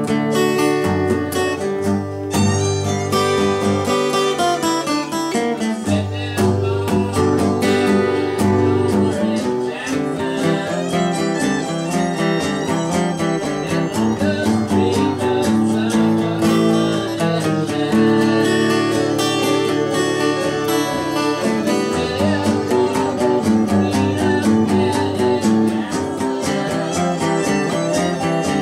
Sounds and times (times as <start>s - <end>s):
Music: 0.0s - 28.6s.